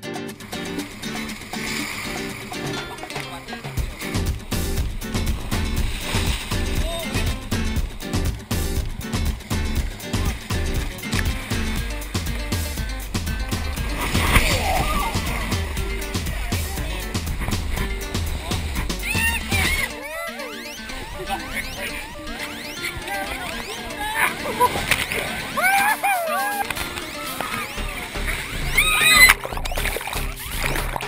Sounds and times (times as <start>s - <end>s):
Music: 0.0s - 31.0s.